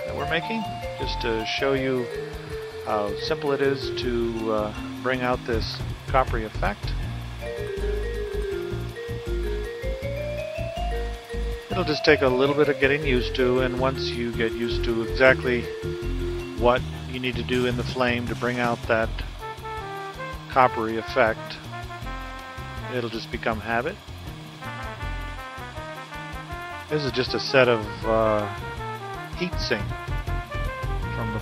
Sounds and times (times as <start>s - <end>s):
Speech: 0.0s - 2.0s, 2.9s - 6.9s, 11.7s - 15.7s, 16.6s - 19.3s, 20.5s - 21.6s, 22.9s - 24.0s, 26.9s - 28.5s, 29.4s - 29.9s, 31.1s - 31.4s
Music: 0.0s - 31.4s.